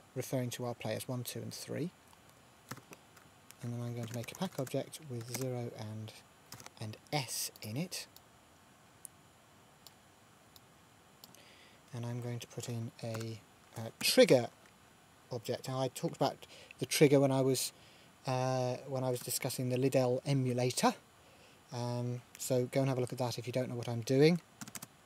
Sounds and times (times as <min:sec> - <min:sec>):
Speech: 0:00.2 - 0:02.0, 0:03.6 - 0:06.2, 0:06.8 - 0:08.1, 0:11.9 - 0:14.5, 0:15.3 - 0:17.7, 0:18.3 - 0:21.0, 0:21.7 - 0:24.4.